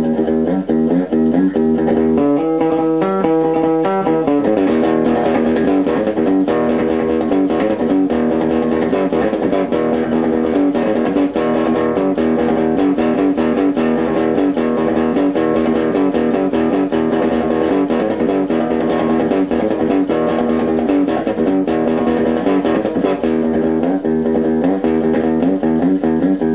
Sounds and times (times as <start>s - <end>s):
Bass guitar: 0.0s - 26.5s
Electric guitar: 0.0s - 26.5s
Strum: 0.0s - 26.5s.